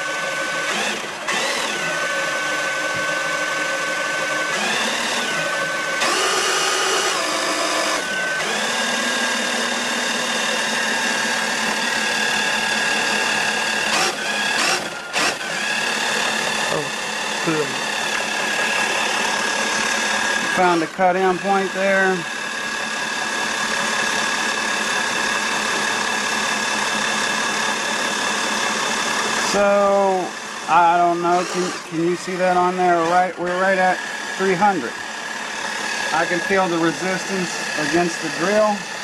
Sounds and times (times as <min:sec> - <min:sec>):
Speech: 0:17.5 - 0:17.8, 0:20.6 - 0:22.3, 0:29.5 - 0:35.0, 0:36.1 - 0:38.9.